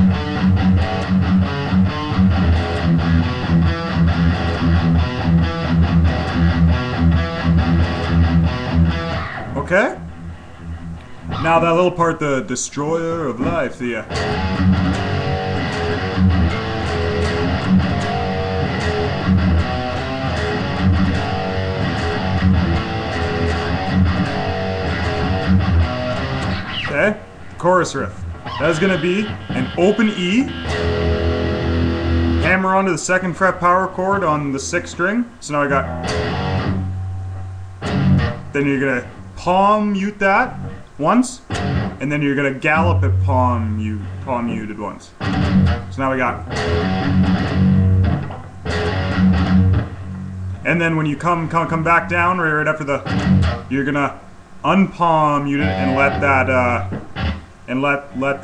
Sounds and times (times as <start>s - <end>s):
Guitar: 0.0s - 58.4s
Speech: 9.5s - 10.0s, 11.3s - 14.1s, 26.9s - 30.5s, 32.4s - 35.9s, 38.6s - 45.2s, 45.9s - 46.5s, 50.6s - 53.1s, 53.7s - 56.9s, 57.7s - 58.4s.